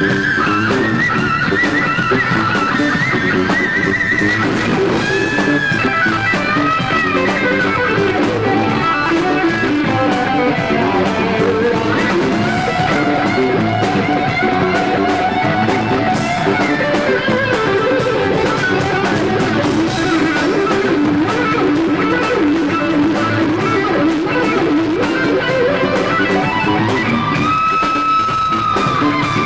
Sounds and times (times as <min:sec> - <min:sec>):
Music: 0:00.0 - 0:29.4.